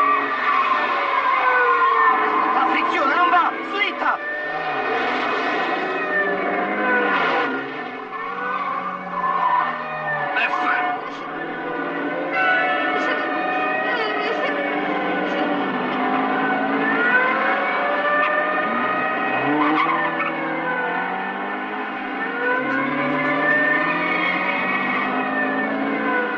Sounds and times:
Car: 0.0 - 26.3
Speech: 2.6 - 4.2.

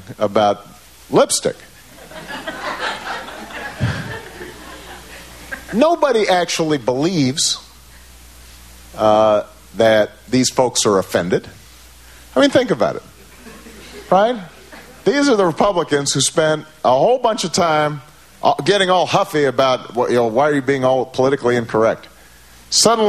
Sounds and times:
Speech: 0.0 - 1.6, 5.7 - 7.7, 9.0 - 11.6, 12.4 - 13.1, 14.1 - 22.1, 22.7 - 23.0.

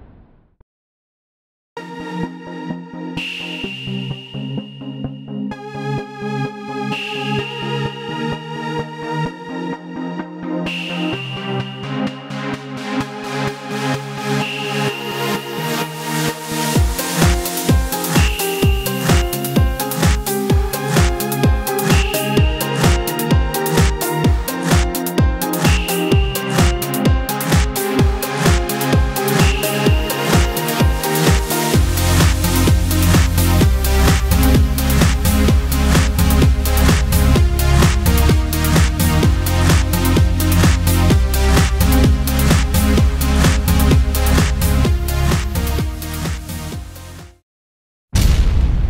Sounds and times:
Music: 1.8 - 47.4.

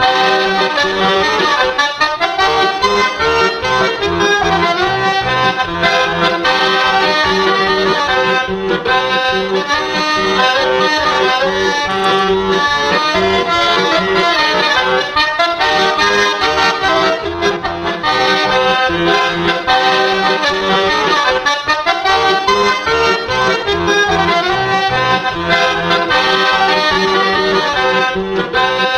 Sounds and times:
Music: 0.0 - 28.9.

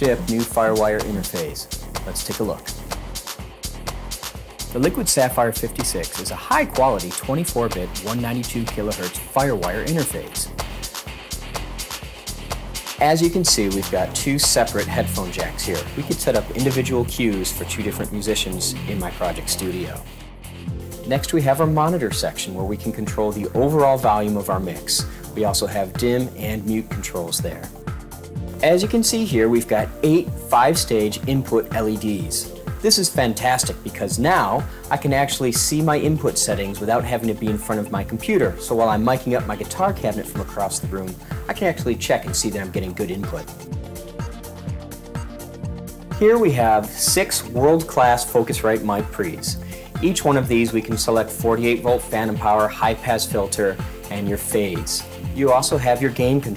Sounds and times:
Speech: 0.0 - 2.8, 4.7 - 10.5, 13.0 - 20.0, 21.1 - 27.7, 28.6 - 43.5, 46.2 - 56.5
Music: 0.0 - 56.5.

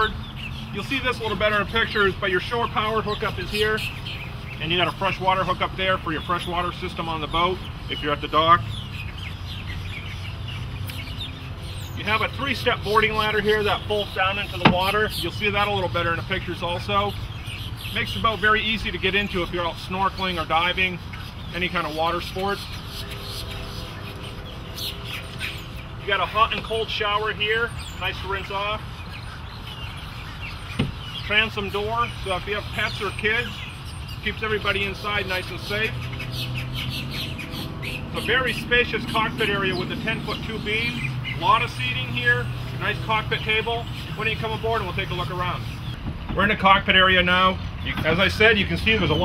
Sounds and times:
Speech: 0.8 - 3.9, 4.6 - 8.6, 12.0 - 17.1, 18.0 - 22.6, 26.1 - 28.8, 31.3 - 33.6, 34.2 - 36.0, 38.2 - 45.7, 46.4 - 49.2.

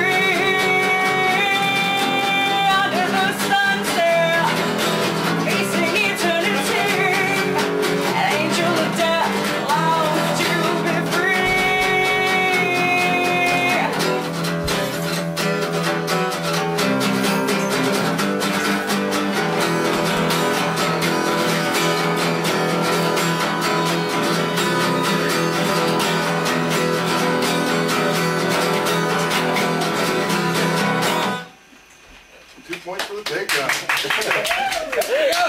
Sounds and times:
Country: 0.0 - 31.4.

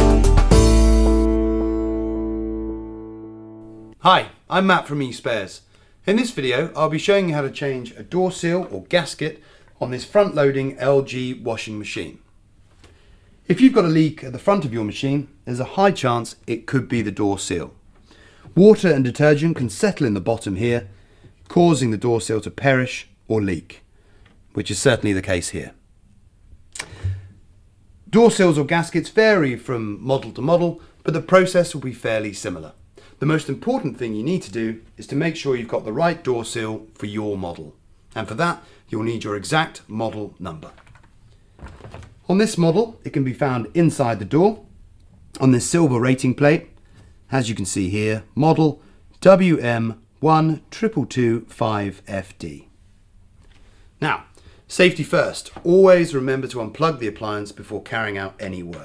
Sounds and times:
Speech: 4.0 - 12.2, 13.5 - 17.8, 18.6 - 20.9, 21.5 - 23.8, 24.5 - 25.8, 28.1 - 40.8, 42.2 - 44.7, 45.4 - 46.7, 47.3 - 52.7, 54.0 - 58.8.

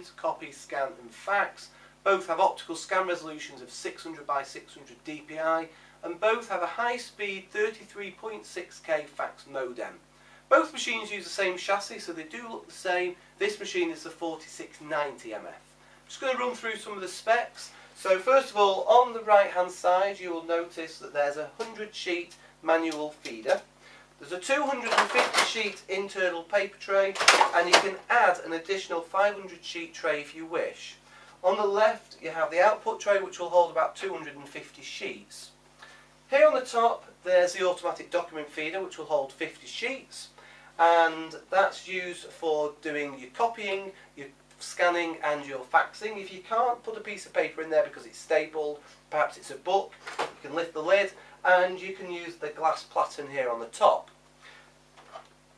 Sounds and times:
Speech: 0.0 - 35.6, 36.3 - 54.2.

